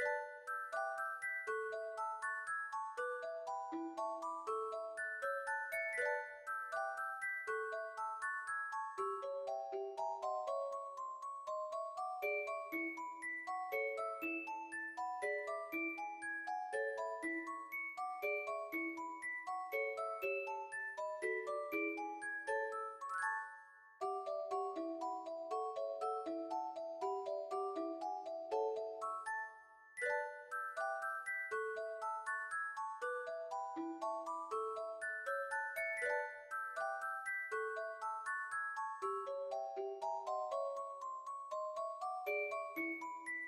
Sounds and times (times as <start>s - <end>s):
Music: 0.0s - 43.4s.